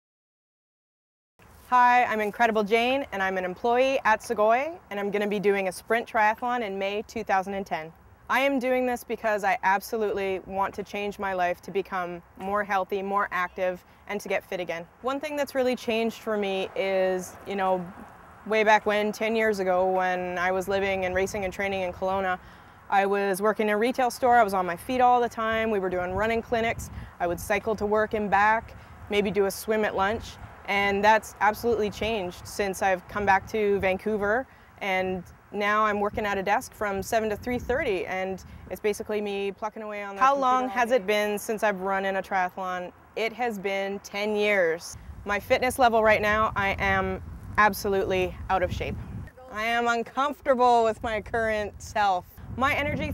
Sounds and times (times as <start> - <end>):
Speech: 1.7 - 53.1.